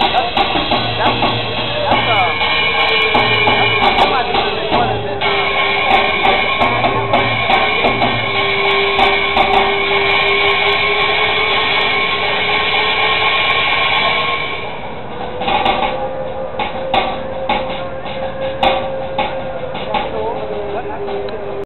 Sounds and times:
Speech: 0:00.0 - 0:08.0, 0:19.5 - 0:21.6
Music: 0:00.0 - 0:21.6.

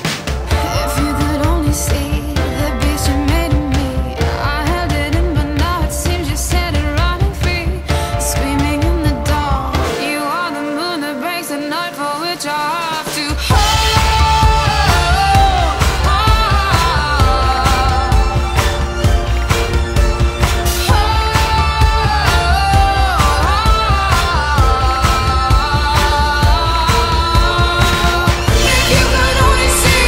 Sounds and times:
Music: 0:00.0 - 0:30.0.

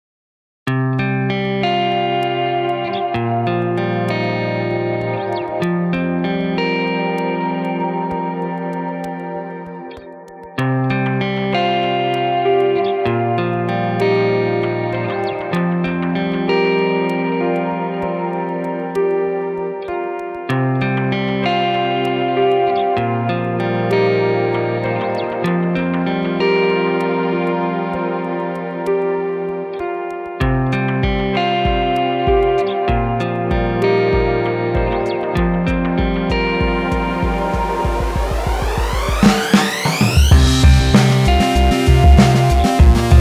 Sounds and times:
Distortion: 0:00.7 - 0:43.2
Music: 0:00.7 - 0:43.2.

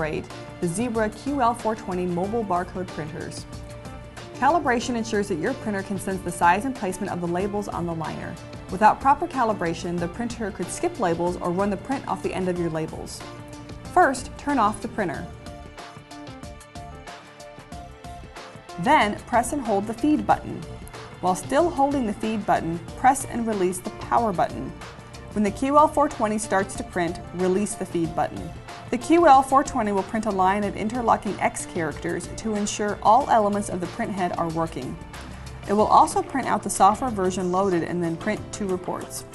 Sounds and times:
Speech: 0:00.0 - 0:03.4, 0:04.4 - 0:13.2, 0:14.0 - 0:15.4, 0:18.8 - 0:24.8, 0:25.4 - 0:35.0, 0:35.7 - 0:39.3
Music: 0:00.0 - 0:39.3.

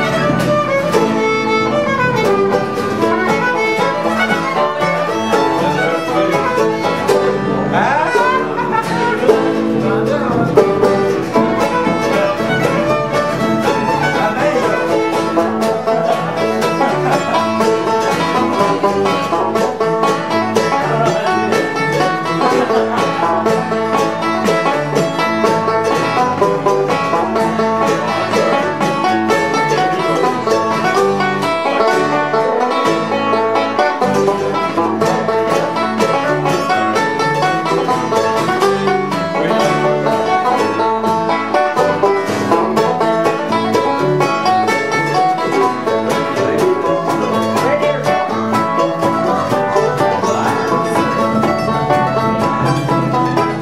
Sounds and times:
Banjo: 0:00.0 - 0:53.6
Bluegrass: 0:00.0 - 0:53.6
Mandolin: 0:00.0 - 0:53.6.

